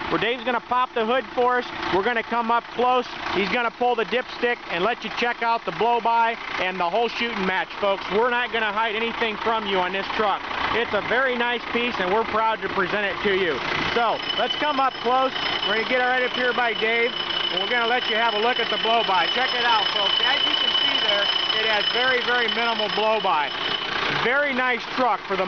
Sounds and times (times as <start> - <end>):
Truck: 0.0 - 25.4
Speech: 0.1 - 23.5, 24.2 - 25.4.